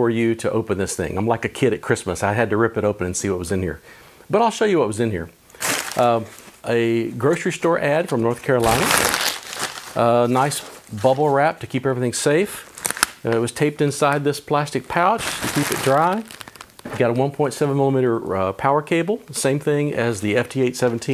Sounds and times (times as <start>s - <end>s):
Speech: 0.0s - 5.4s, 6.0s - 9.0s, 10.0s - 16.3s, 16.9s - 21.1s.